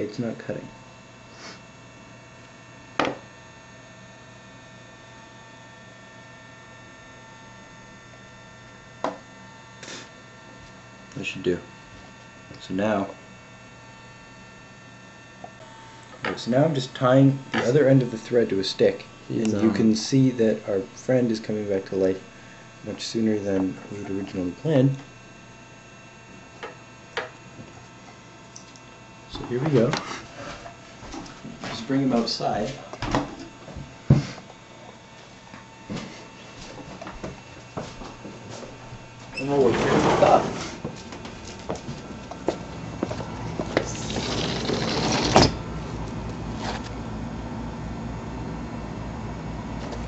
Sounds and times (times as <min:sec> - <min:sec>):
Speech: 0:00.0 - 0:00.8, 0:11.2 - 0:11.7, 0:12.5 - 0:13.2, 0:16.4 - 0:25.1, 0:29.3 - 0:30.1, 0:31.7 - 0:32.9, 0:39.4 - 0:40.7.